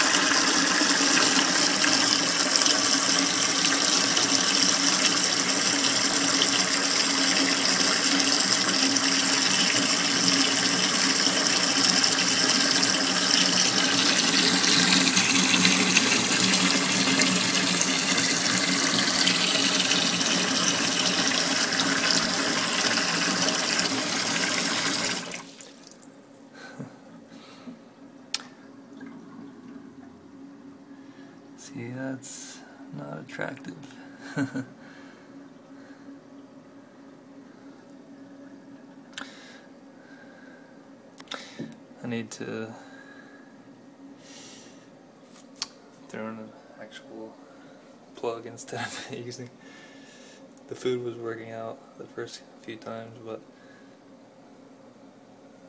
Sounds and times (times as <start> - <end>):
Sink (filling or washing): 0.0 - 26.1
Water tap, faucet: 0.0 - 26.1
Water: 0.0 - 26.2, 28.8 - 30.2.